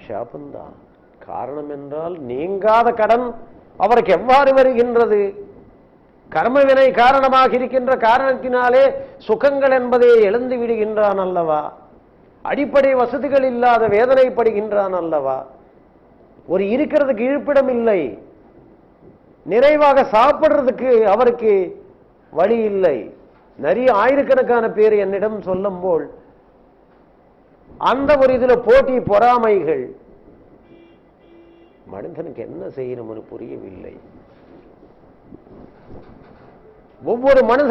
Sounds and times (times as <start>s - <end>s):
Male speech, man speaking: 0.0s - 5.5s, 6.3s - 11.8s, 12.5s - 15.5s, 16.5s - 18.2s, 19.5s - 21.8s, 22.4s - 26.2s, 27.8s - 30.0s, 31.9s - 34.1s, 37.0s - 37.7s
Narration, monologue: 0.0s - 37.7s.